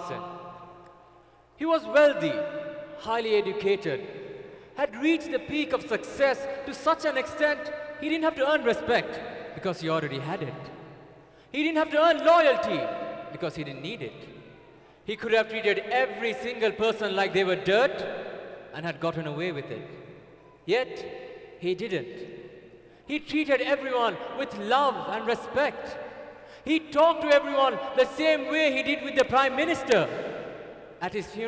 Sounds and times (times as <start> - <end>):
Male speech, man speaking: 0.0 - 0.5, 1.6 - 4.1, 4.8 - 10.7, 11.6 - 14.4, 15.1 - 18.1, 18.8 - 19.9, 20.7 - 22.3, 23.1 - 26.0, 26.7 - 30.2, 31.0 - 31.4
Narration, monologue: 0.0 - 31.4.